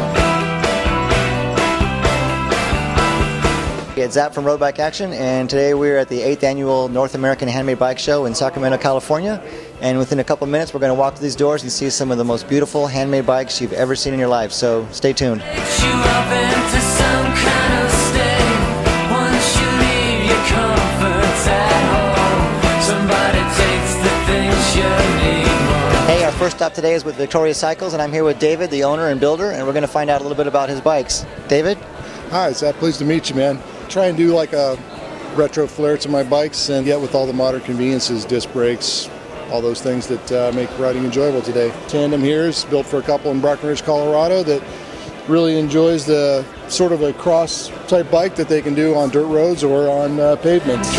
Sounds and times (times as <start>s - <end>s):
Music: 0.0s - 50.9s
Speech: 4.0s - 15.5s, 26.1s - 34.8s, 45.3s - 50.9s.